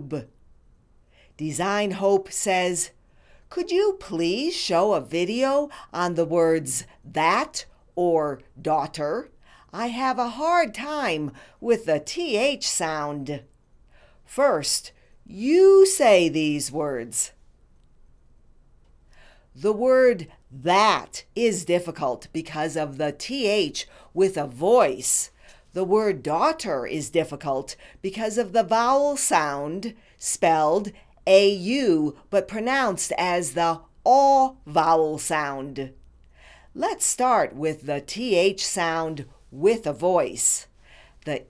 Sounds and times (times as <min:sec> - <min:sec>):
Female speech, woman speaking: 0:00.0 - 0:00.3, 0:01.4 - 0:02.9, 0:03.5 - 0:13.4, 0:14.3 - 0:17.4, 0:19.6 - 0:36.0, 0:36.8 - 0:40.7, 0:41.3 - 0:41.4
Narration, monologue: 0:00.0 - 0:41.4.